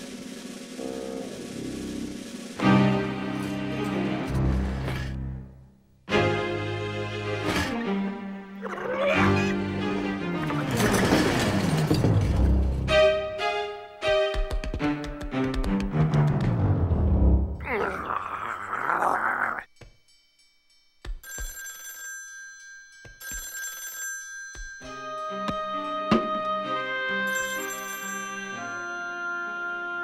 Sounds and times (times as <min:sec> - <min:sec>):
Music: 0:00.0 - 0:17.7, 0:24.8 - 0:30.0.